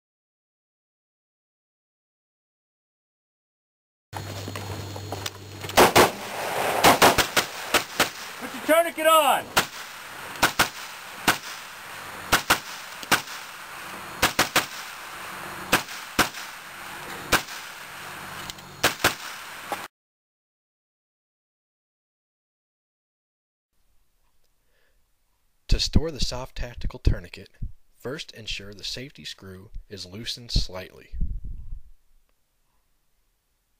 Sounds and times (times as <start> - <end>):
Outside, rural or natural: 4.2 - 19.9, 23.8 - 33.7
Speech: 8.4 - 9.5, 25.7 - 31.2.